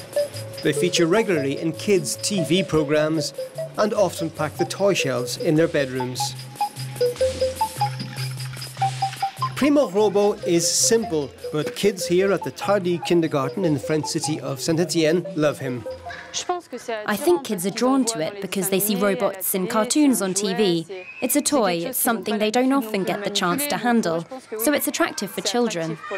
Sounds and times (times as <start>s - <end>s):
Speech: 0.7s - 6.4s, 9.6s - 15.8s, 16.4s - 26.1s.